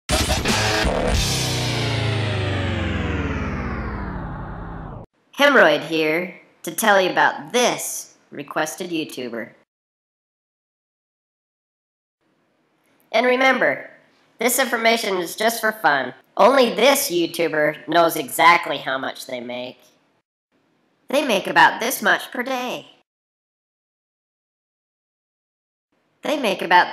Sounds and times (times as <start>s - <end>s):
Music: 0.1s - 3.5s
Speech: 5.4s - 9.6s, 13.1s - 19.8s, 21.1s - 23.0s, 26.2s - 26.9s.